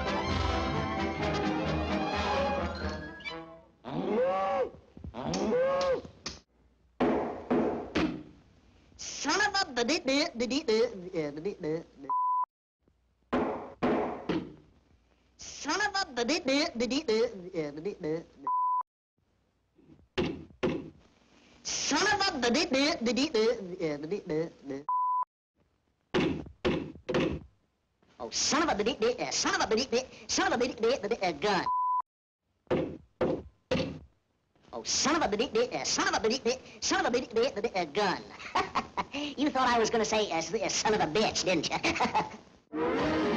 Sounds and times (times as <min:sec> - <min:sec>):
Speech: 0:09.0 - 0:12.1, 0:15.4 - 0:18.5, 0:21.7 - 0:24.9, 0:28.2 - 0:31.7, 0:34.7 - 0:38.4, 0:39.3 - 0:42.0.